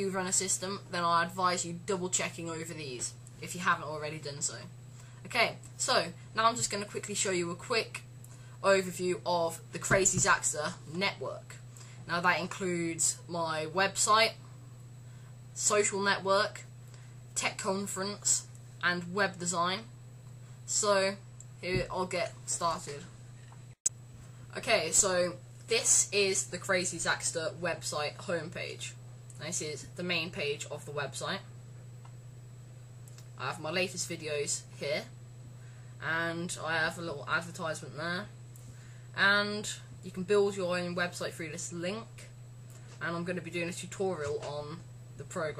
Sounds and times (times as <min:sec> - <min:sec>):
Speech: 0:00.0 - 0:04.7, 0:05.3 - 0:14.4, 0:15.6 - 0:16.7, 0:17.4 - 0:19.9, 0:20.7 - 0:23.1, 0:24.5 - 0:31.5, 0:33.4 - 0:35.2, 0:36.0 - 0:38.4, 0:39.2 - 0:42.4, 0:43.0 - 0:45.5
Inside, small room: 0:00.0 - 0:45.5.